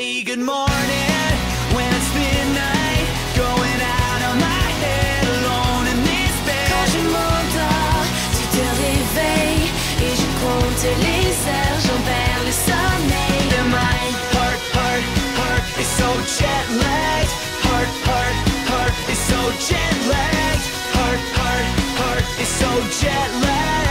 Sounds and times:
Exciting music: 0.7s - 23.9s.

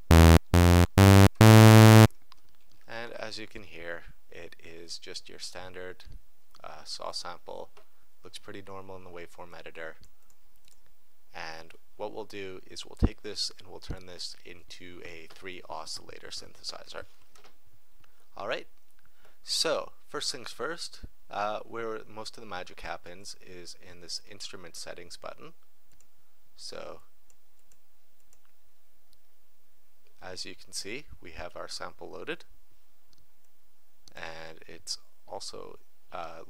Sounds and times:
Sampler: 0.0s - 2.1s
Speech: 2.9s - 10.0s, 11.3s - 17.1s, 18.4s - 18.8s, 19.4s - 25.6s, 26.6s - 27.1s, 30.2s - 32.5s, 34.1s - 36.4s.

